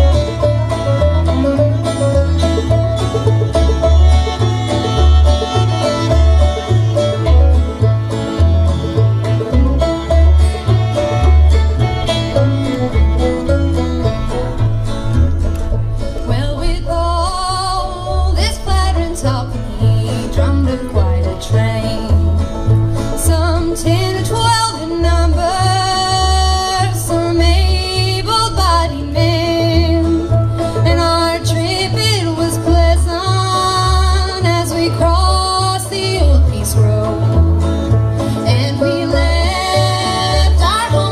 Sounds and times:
Banjo: 0.0s - 41.1s
Country: 0.0s - 41.1s
Violin, fiddle: 0.0s - 41.1s.

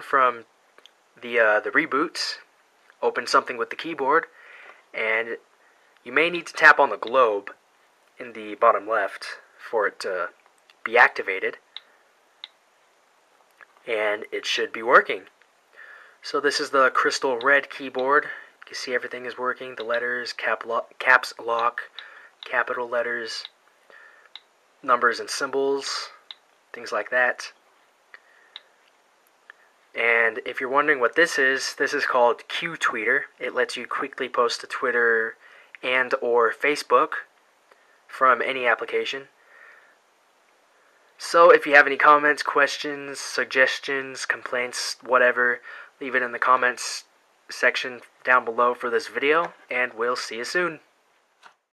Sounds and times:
Speech: 0.0s - 0.5s, 1.2s - 4.3s, 4.9s - 7.6s, 8.2s - 11.6s, 13.8s - 15.3s, 16.2s - 23.5s, 24.8s - 27.6s, 29.9s - 37.3s, 38.1s - 39.4s, 41.2s - 50.9s.

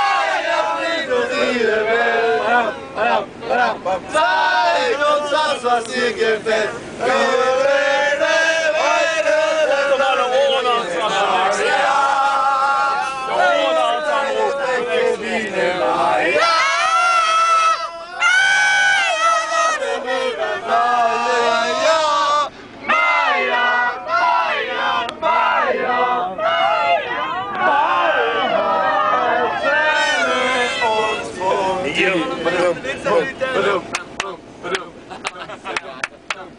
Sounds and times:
Bus: 0.0s - 36.5s.

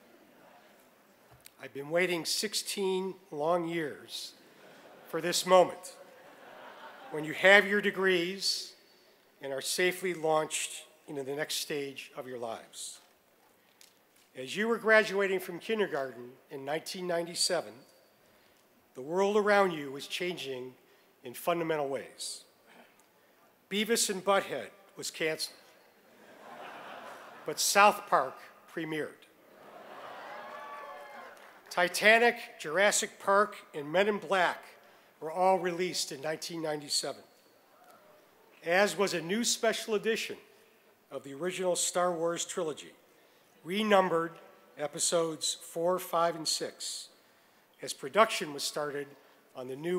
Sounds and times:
Male speech, man speaking: 1.6s - 4.4s, 5.1s - 6.0s, 7.1s - 8.8s, 9.4s - 13.0s, 14.4s - 17.8s, 19.0s - 22.5s, 23.7s - 25.6s, 27.5s - 29.3s, 31.7s - 37.2s, 38.6s - 40.4s, 41.1s - 43.0s, 43.6s - 47.1s, 47.8s - 49.9s.

